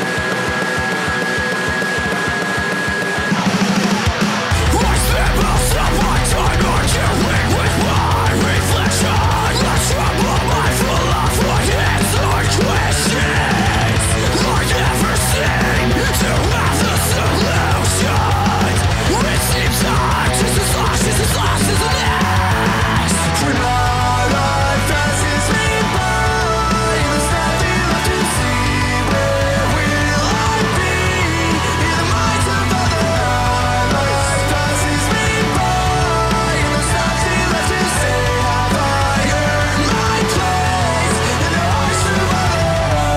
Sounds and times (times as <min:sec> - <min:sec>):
Music: 0:00.0 - 0:43.1.